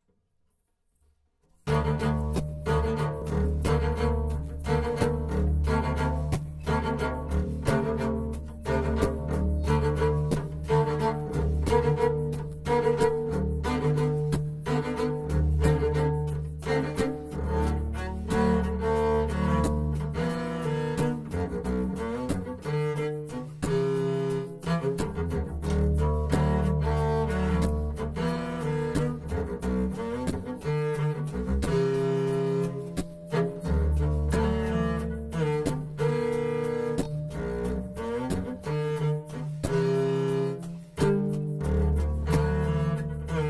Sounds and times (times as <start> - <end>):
Double bass: 1.6 - 43.4.